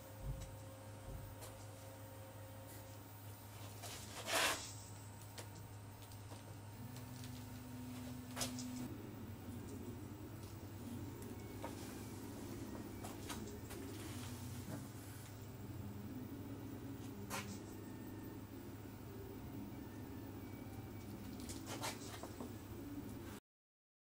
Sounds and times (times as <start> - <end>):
Printer: 0.0 - 5.0, 6.4 - 23.4.